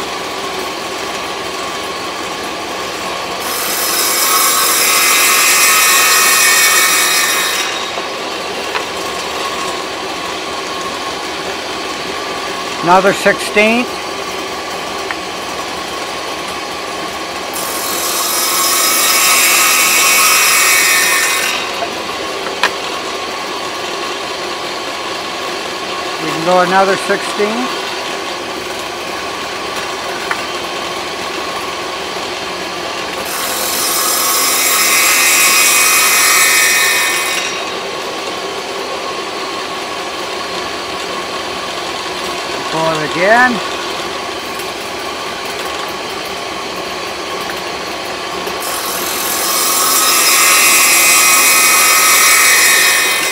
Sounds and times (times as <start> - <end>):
Speech: 12.8 - 13.9, 26.2 - 27.8, 42.6 - 43.7.